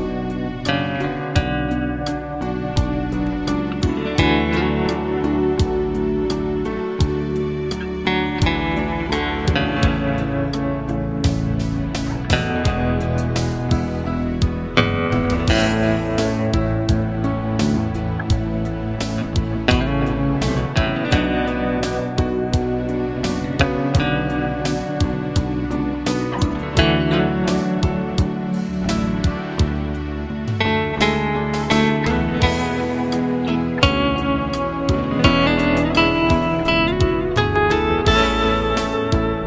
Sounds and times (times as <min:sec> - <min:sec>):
Music: 0:00.0 - 0:39.4.